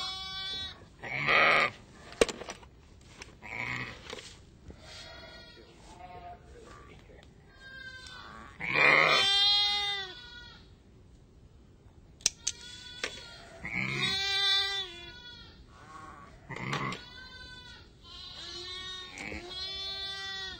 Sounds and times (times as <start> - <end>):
Bleat: 0.0 - 1.8, 3.4 - 4.0, 4.7 - 10.7, 12.4 - 20.5.